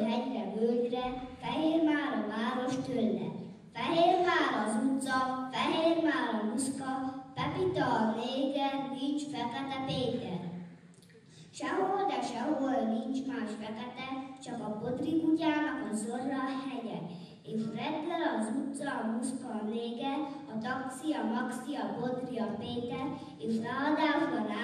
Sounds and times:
Speech: 0:00.0 - 0:10.5, 0:11.5 - 0:24.6.

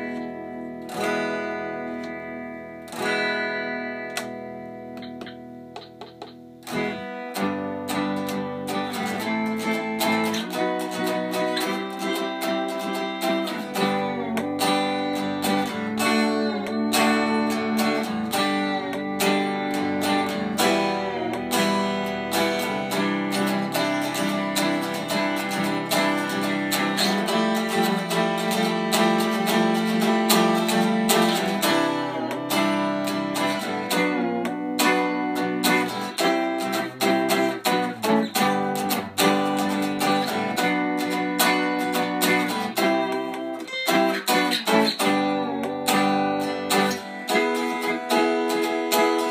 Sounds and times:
Electric guitar: 0:00.0 - 0:49.3
Strum: 0:00.0 - 0:49.3.

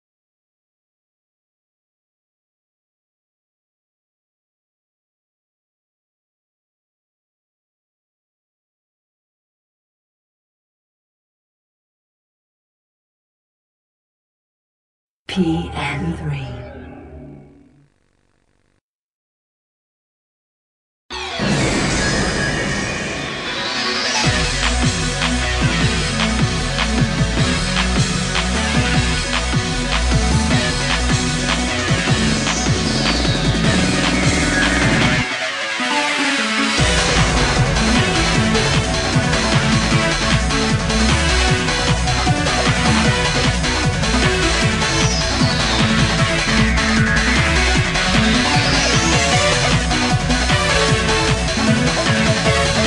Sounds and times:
Music: 0:21.1 - 0:52.8.

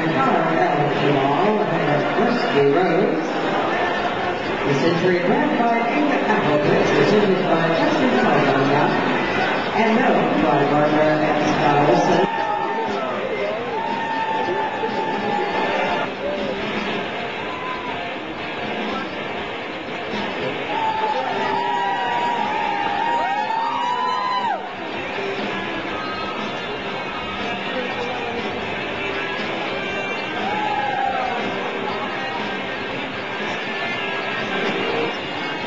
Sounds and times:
Speech: 0:00.0 - 0:03.7, 0:04.6 - 0:12.3.

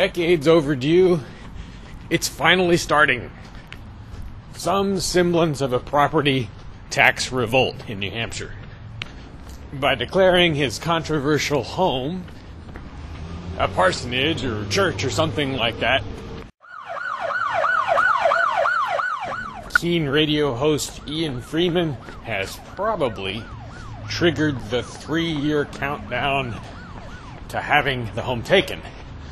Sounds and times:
Speech: 0:00.0 - 0:01.3, 0:02.1 - 0:03.3, 0:04.6 - 0:08.6, 0:09.7 - 0:12.3, 0:13.6 - 0:16.0, 0:19.7 - 0:23.5, 0:24.1 - 0:26.7, 0:27.5 - 0:28.9.

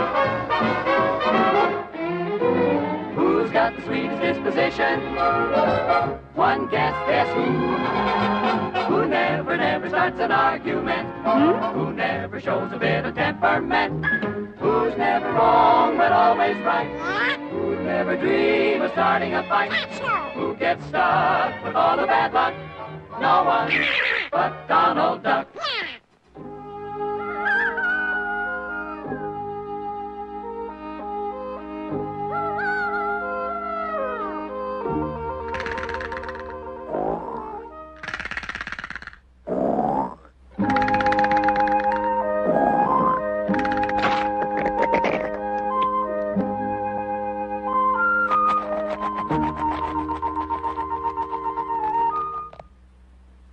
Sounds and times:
Music: 0:00.0 - 0:23.8, 0:24.4 - 0:25.4, 0:26.3 - 0:38.2, 0:40.6 - 0:52.8.

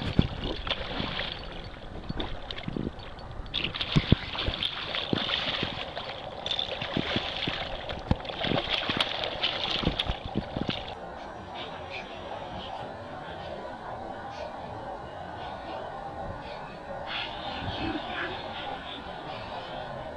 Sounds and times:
Stream: 0:00.0 - 0:20.1.

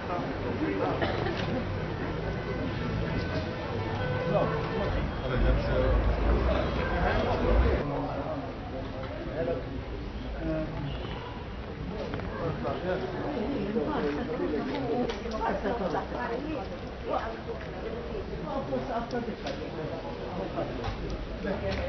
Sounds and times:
Speech: 0:04.2 - 0:21.8.

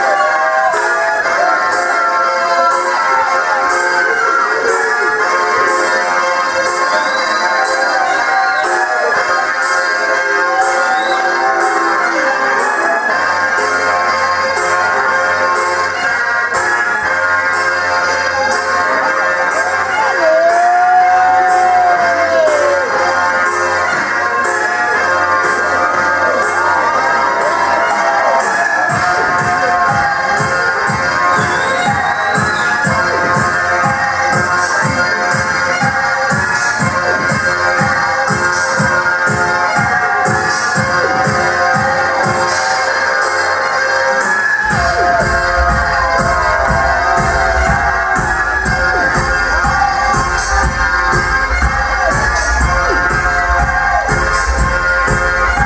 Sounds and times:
Hubbub, speech noise, speech babble: 0:00.0 - 0:55.6
Music: 0:00.0 - 0:55.6.

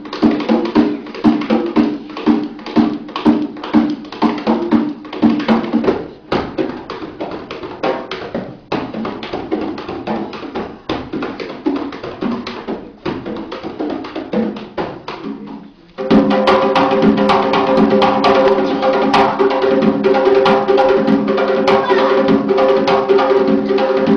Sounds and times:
Drum: 0:00.0 - 0:24.1
Inside, large room or hall: 0:00.0 - 0:24.1.

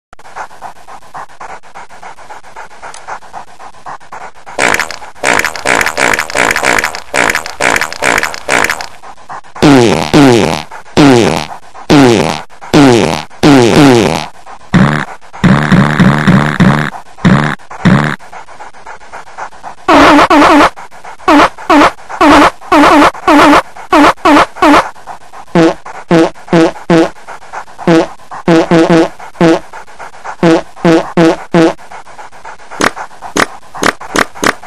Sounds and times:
Dog: 0:00.2 - 0:34.6
Fart: 0:04.6 - 0:08.9, 0:09.6 - 0:18.2, 0:21.3 - 0:24.8, 0:25.6 - 0:27.1, 0:27.9 - 0:29.6, 0:30.4 - 0:31.8.

